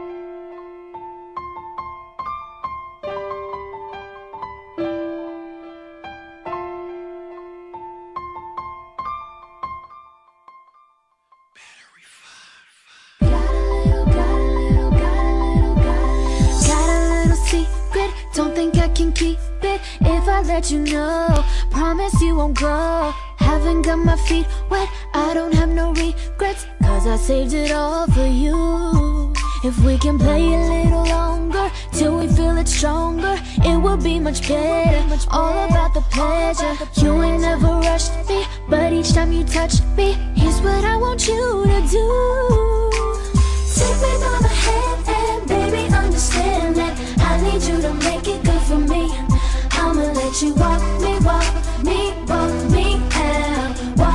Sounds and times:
Music: 0.0s - 12.0s, 13.2s - 54.1s.

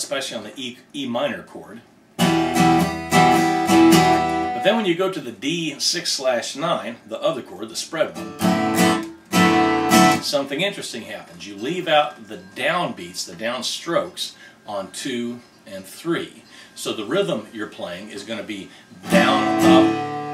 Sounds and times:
Speech: 0.0s - 1.9s, 4.6s - 8.2s, 10.2s - 19.9s
Acoustic guitar: 2.2s - 20.3s.

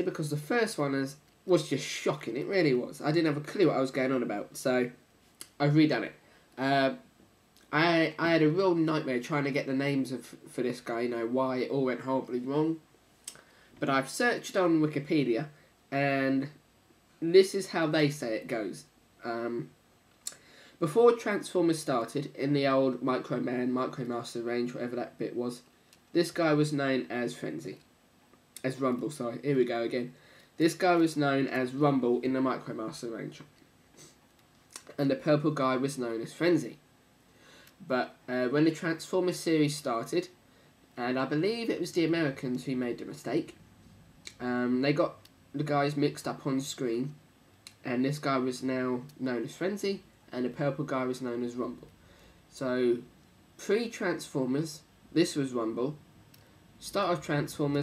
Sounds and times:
Speech: 0.0s - 12.8s, 13.8s - 16.6s, 17.2s - 19.7s, 20.3s - 27.9s, 28.6s - 33.5s, 34.8s - 36.8s, 37.8s - 40.4s, 41.0s - 43.6s, 44.3s - 51.9s, 52.5s - 56.0s, 56.8s - 57.8s.

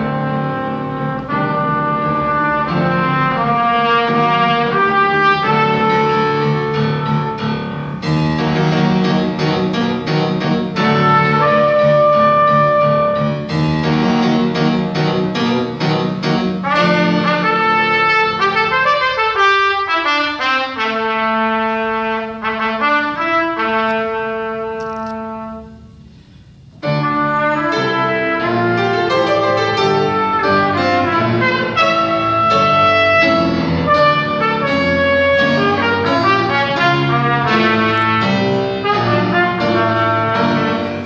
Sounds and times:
Trumpet: 0.0s - 26.2s, 26.8s - 41.0s
Classical music: 0.0s - 41.0s
Piano: 0.0s - 41.0s.

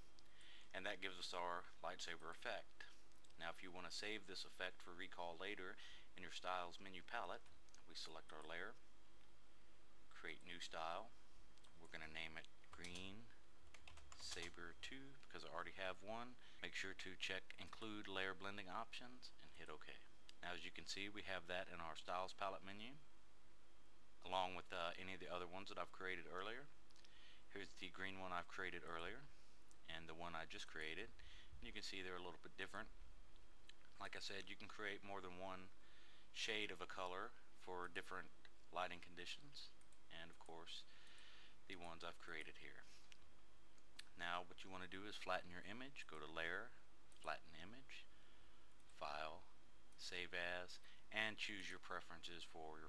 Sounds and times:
Inside, small room: 0.0s - 52.8s
Speech: 0.7s - 8.8s, 10.1s - 11.1s, 11.8s - 13.4s, 14.2s - 23.0s, 24.2s - 26.7s, 27.5s - 33.0s, 34.0s - 35.8s, 36.4s - 40.9s, 41.7s - 43.0s, 44.0s - 48.1s, 48.9s - 52.8s.

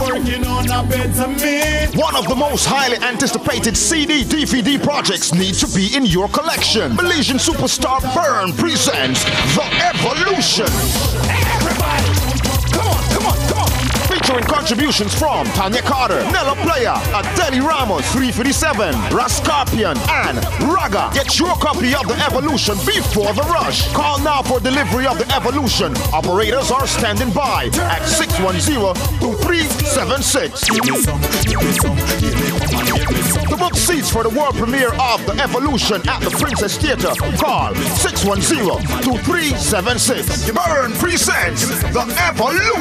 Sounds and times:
Music: 0.0s - 42.8s
Speech: 1.6s - 31.1s, 33.3s - 42.8s.

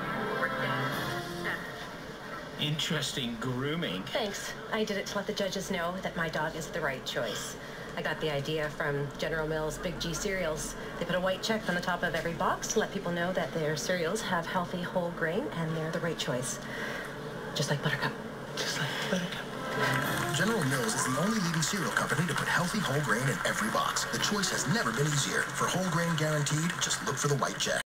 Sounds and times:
Music: 0.0s - 2.1s, 19.4s - 27.7s
Speech: 20.3s - 27.8s.

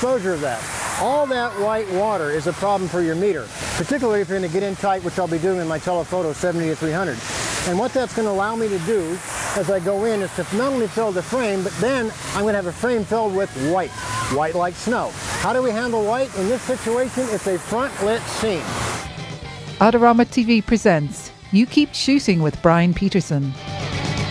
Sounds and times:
Speech: 0.0s - 18.6s, 19.8s - 23.5s.

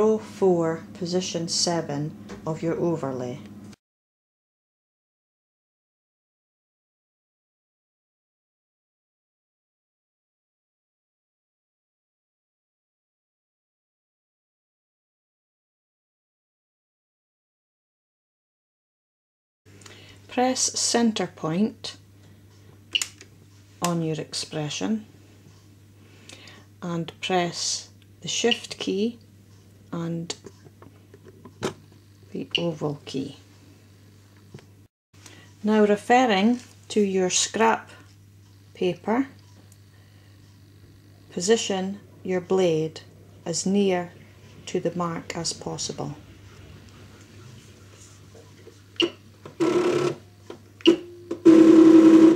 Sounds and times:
Speech: 0.0s - 3.5s, 20.3s - 22.0s, 23.8s - 25.1s, 26.8s - 29.2s, 30.0s - 30.5s, 32.3s - 33.5s, 35.6s - 38.1s, 38.8s - 39.4s, 41.3s - 46.2s.

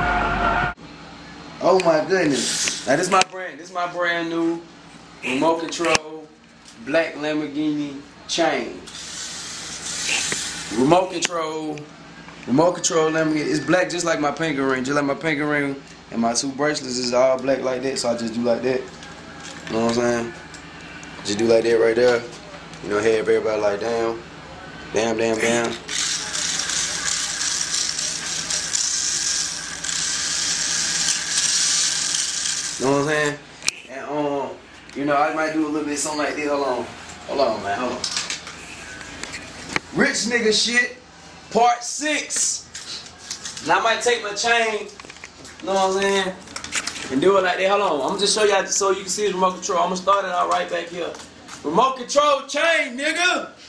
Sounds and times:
Inside, small room: 0.0s - 53.6s.

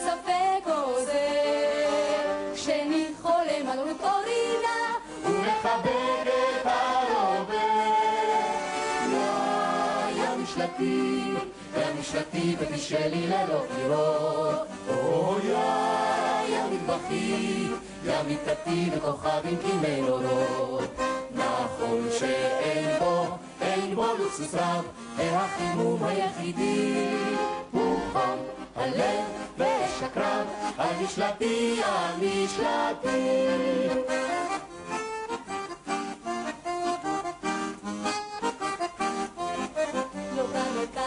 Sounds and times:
Singing: 0.0s - 34.2s, 40.3s - 41.0s
Music: 0.0s - 41.0s.

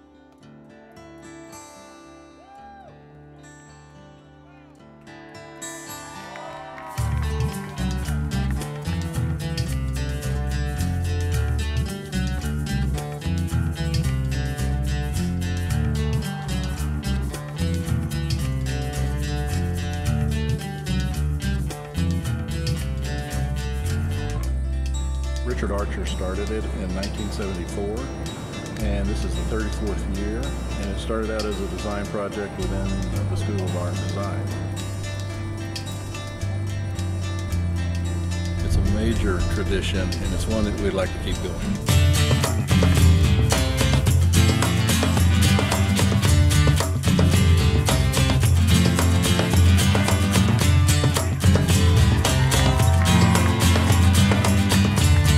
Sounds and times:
Music: 0.0s - 55.3s
Speech: 25.4s - 28.1s, 28.8s - 34.5s, 38.6s - 41.8s.

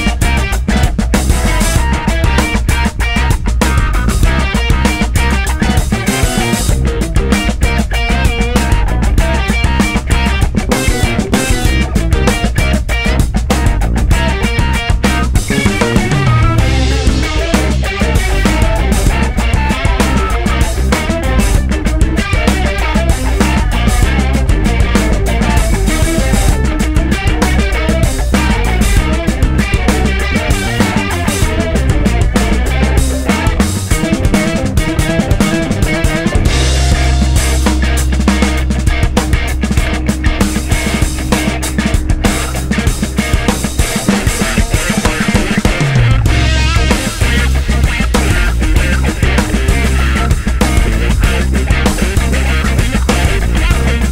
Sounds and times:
Music: 0.0s - 54.1s.

